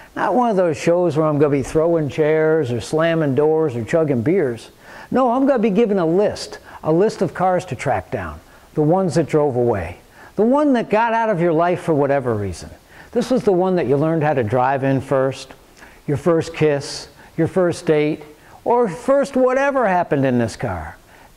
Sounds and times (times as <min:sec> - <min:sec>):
Speech: 0:00.2 - 0:21.0.